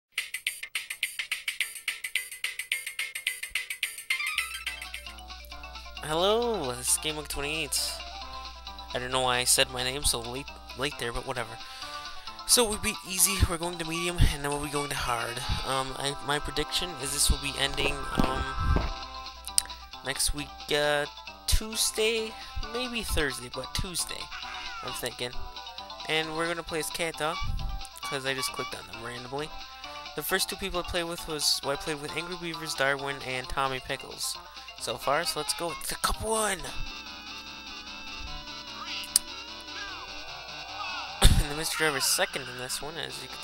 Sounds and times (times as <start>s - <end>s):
Music: 0.1s - 43.4s
Speech: 6.0s - 8.0s, 8.9s - 11.6s, 12.5s - 18.6s, 20.0s - 25.4s, 26.1s - 27.4s, 28.0s - 29.5s, 30.2s - 36.8s, 41.2s - 43.4s.